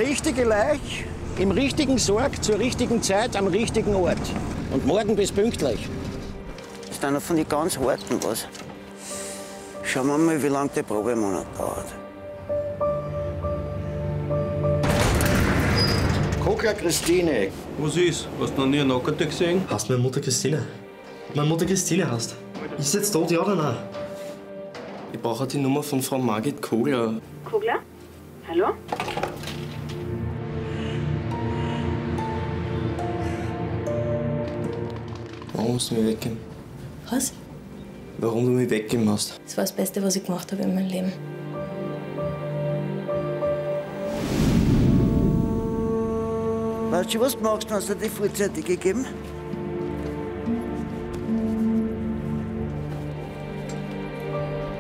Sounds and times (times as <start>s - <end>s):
Music: 0.0s - 54.8s.